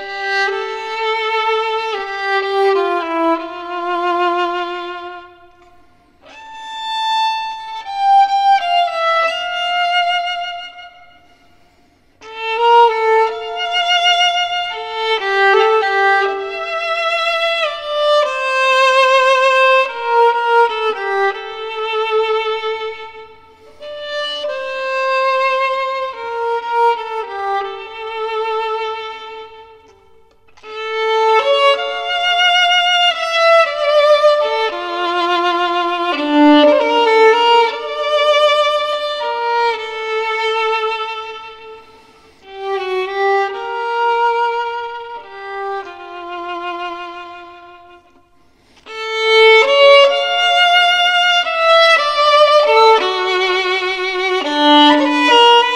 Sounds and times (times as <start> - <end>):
Violin, fiddle: 0.0 - 55.7.